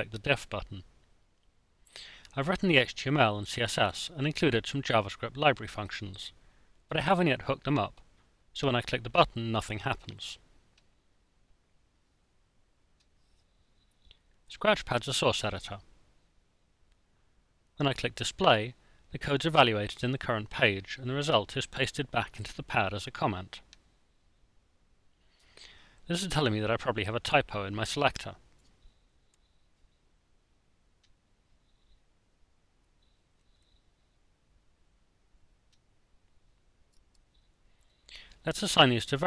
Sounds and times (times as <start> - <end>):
Speech: 0.0 - 0.9, 2.3 - 8.0, 8.6 - 10.4, 14.5 - 15.8, 17.8 - 23.7, 26.1 - 28.4, 38.4 - 39.2.